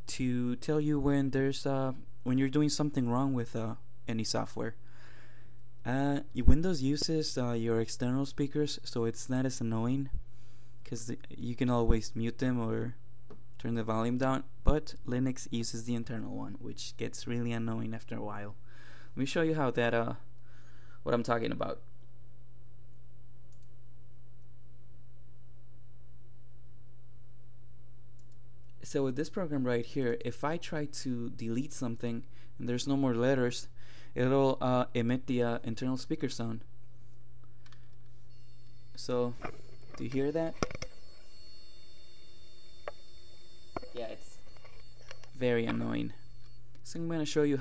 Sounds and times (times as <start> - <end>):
Speech: 0.1 - 4.8, 5.8 - 10.2, 10.8 - 13.0, 13.6 - 18.6, 19.2 - 20.3, 21.0 - 21.9, 28.8 - 36.7, 39.0 - 40.6, 43.9 - 44.3, 45.4 - 46.2, 46.8 - 47.6.